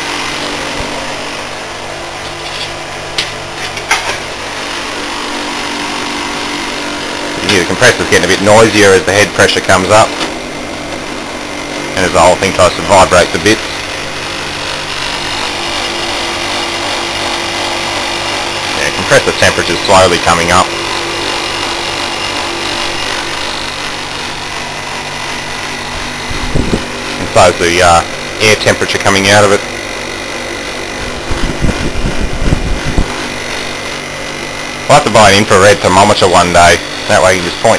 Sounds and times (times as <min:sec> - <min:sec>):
Engine: 0:00.0 - 0:37.7
Speech: 0:07.4 - 0:10.2, 0:12.0 - 0:13.8, 0:18.8 - 0:20.7, 0:27.3 - 0:29.7, 0:34.9 - 0:37.7.